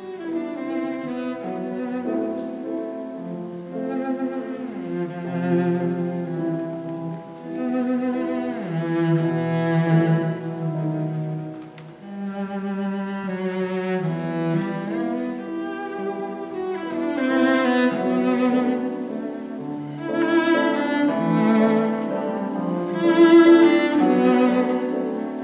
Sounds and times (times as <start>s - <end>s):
Music: 0.0s - 25.4s.